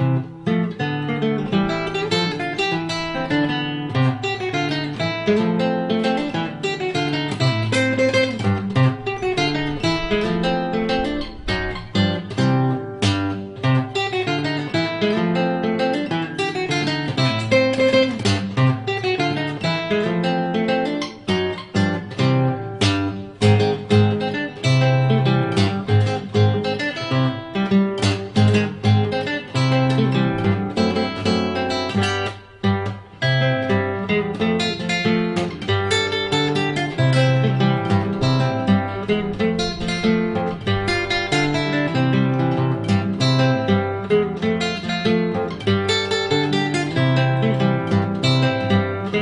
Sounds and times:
Acoustic guitar: 0.0 - 49.2
Strum: 0.0 - 49.2.

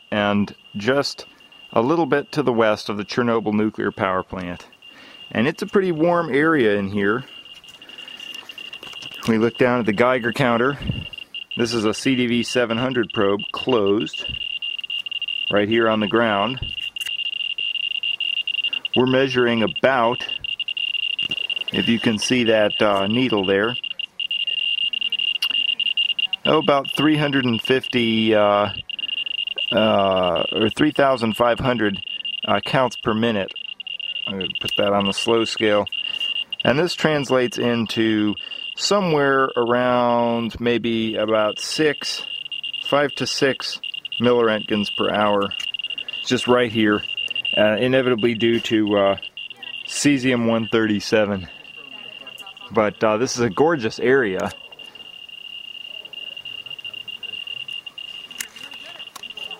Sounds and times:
Speech: 0.1 - 4.7, 5.3 - 7.3, 9.2 - 11.0, 11.6 - 14.3, 15.5 - 16.7, 19.0 - 20.4, 21.7 - 28.8, 29.7 - 35.9, 36.6 - 45.6, 46.2 - 54.7.

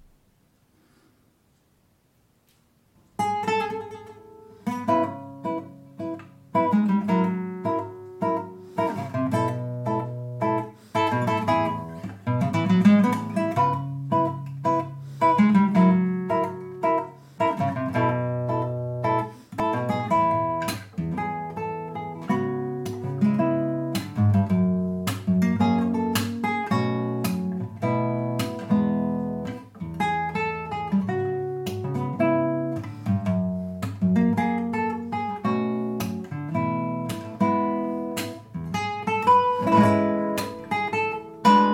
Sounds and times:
Acoustic guitar: 2.4 - 41.7.

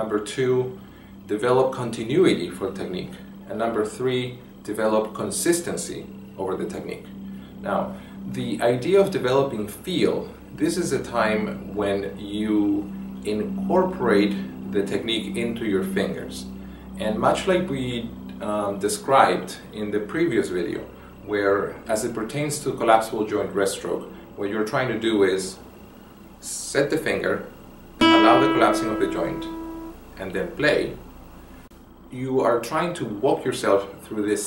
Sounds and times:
Speech: 0.0 - 25.6, 26.4 - 27.5, 28.2 - 29.5, 30.2 - 31.0, 32.1 - 34.4.

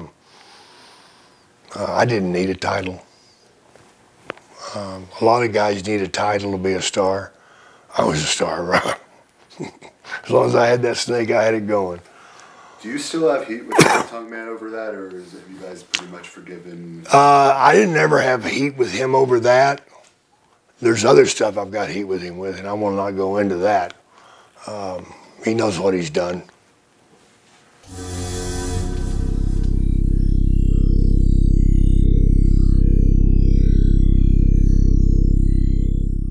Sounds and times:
Speech: 1.7 - 3.1, 4.7 - 7.3, 8.0 - 8.7, 10.2 - 12.0, 12.8 - 19.9, 20.8 - 24.0, 24.7 - 26.5
Music: 27.9 - 32.7.

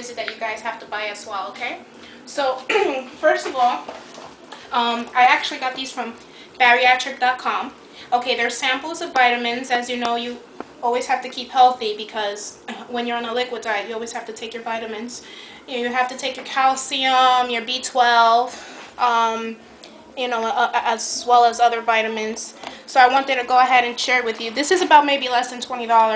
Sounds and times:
Speech: 0.0 - 3.9, 4.7 - 19.6, 20.2 - 26.1.

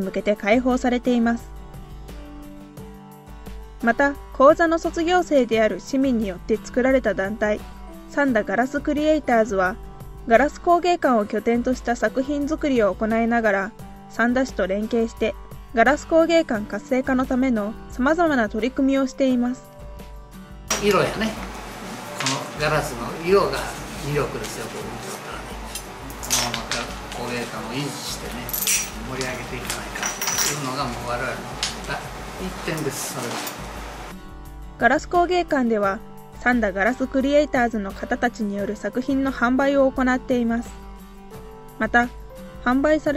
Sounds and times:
Music: 0.0 - 43.1
Speech: 22.2 - 25.6, 26.3 - 33.5.

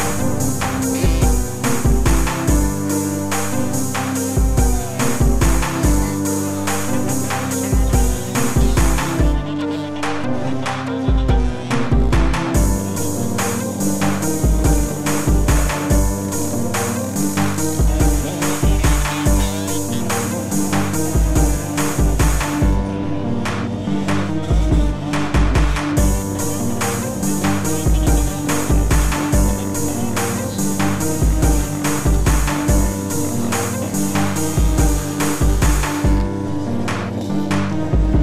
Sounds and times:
Music: 0.0 - 38.2.

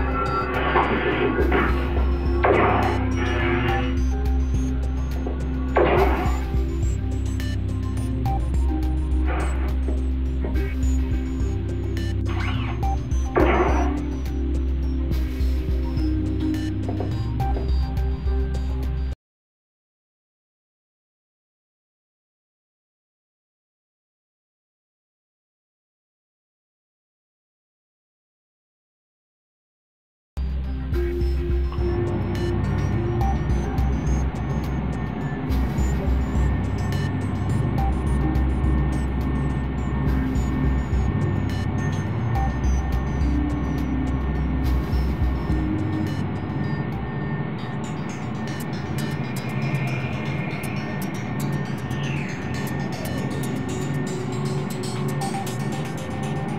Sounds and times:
Music: 0.0 - 19.2, 30.4 - 56.5.

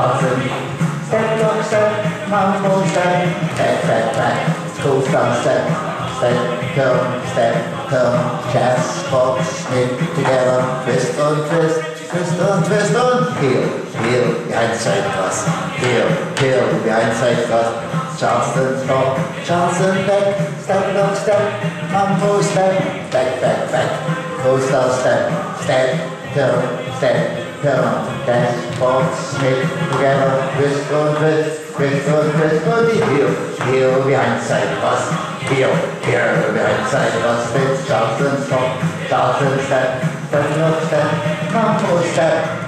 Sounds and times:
Music: 0.0 - 42.6
Speech: 0.0 - 42.6.

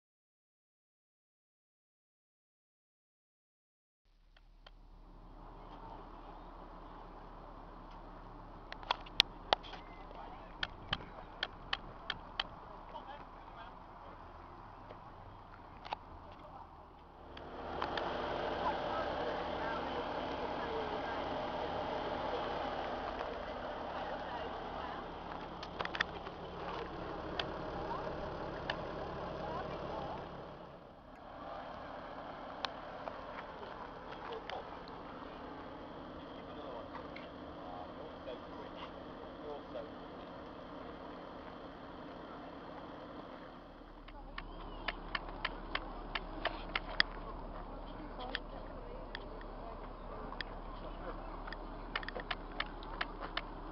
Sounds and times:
Car: 4.1 - 53.7.

